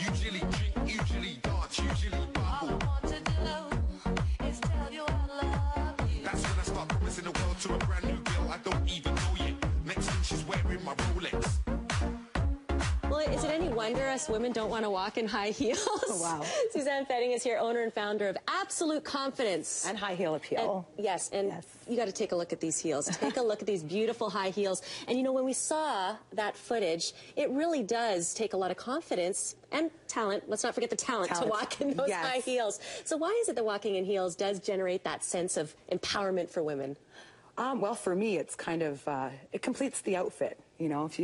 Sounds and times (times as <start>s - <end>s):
Speech: 30.8s - 32.8s.